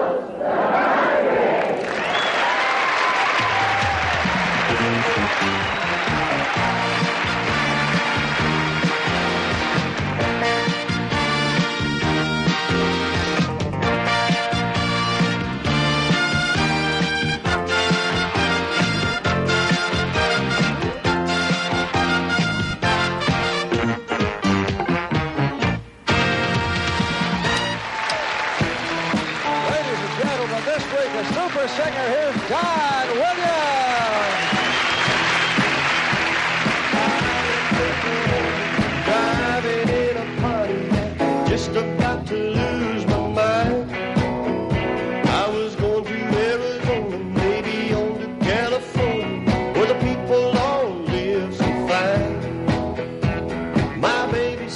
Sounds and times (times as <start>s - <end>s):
Music: 2.9s - 54.7s
Speech: 29.6s - 34.4s.